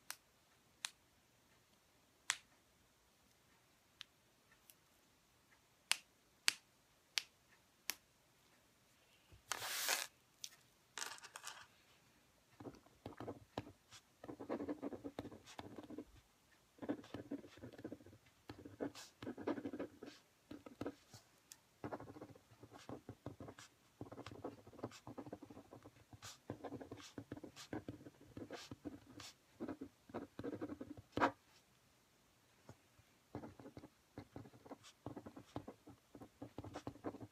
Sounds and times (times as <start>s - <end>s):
Writing: 12.5s - 31.7s, 33.3s - 37.3s.